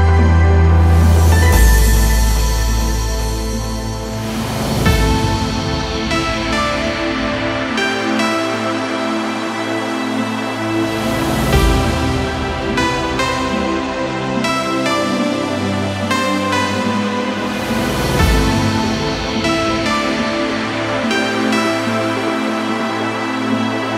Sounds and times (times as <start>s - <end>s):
Trance music: 0.0s - 23.9s.